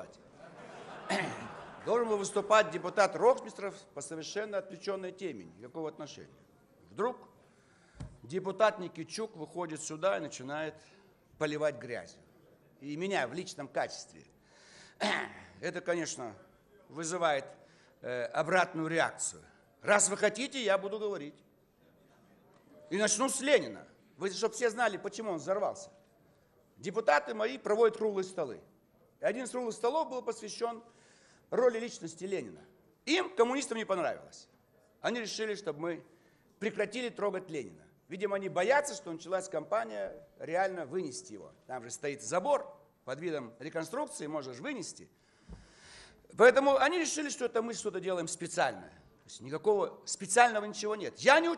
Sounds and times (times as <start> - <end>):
Male speech, man speaking: 0.0 - 0.2, 1.1 - 7.4, 8.2 - 14.3, 15.0 - 26.0, 26.8 - 30.9, 31.5 - 45.1, 46.3 - 51.5
Narration, monologue: 0.0 - 51.5.